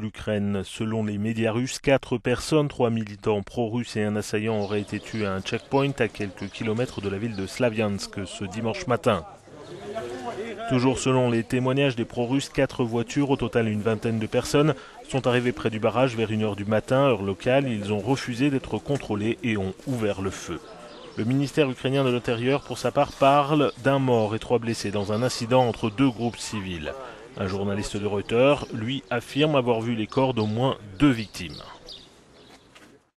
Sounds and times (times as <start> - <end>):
Speech: 0.0 - 31.9.